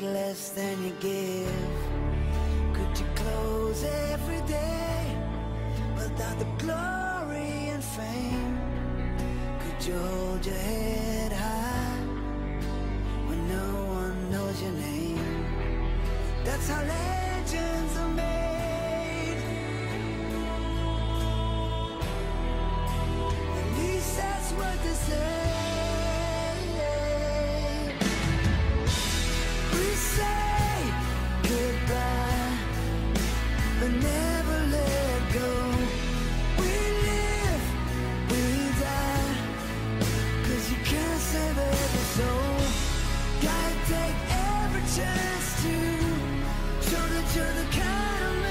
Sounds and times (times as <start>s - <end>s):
Exciting music: 15.5s - 48.5s.